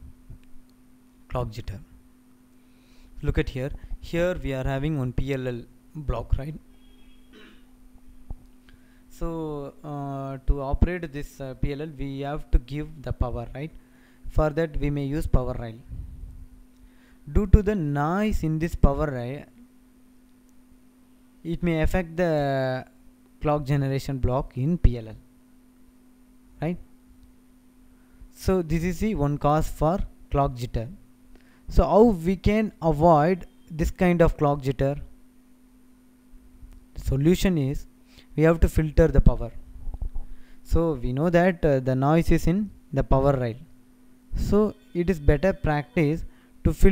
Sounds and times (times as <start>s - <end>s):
Speech: 1.3s - 2.0s, 3.2s - 6.6s, 9.1s - 15.9s, 17.3s - 19.6s, 21.5s - 25.2s, 26.6s - 26.8s, 28.3s - 31.0s, 31.7s - 35.1s, 37.0s - 39.6s, 40.7s - 43.7s, 44.4s - 46.9s.